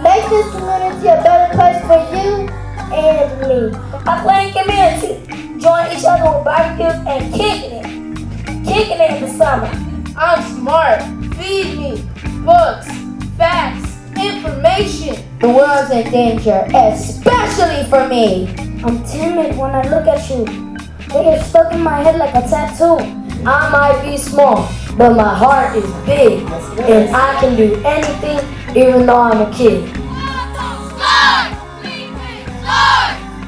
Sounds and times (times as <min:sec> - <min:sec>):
Music: 0:00.0 - 0:33.4.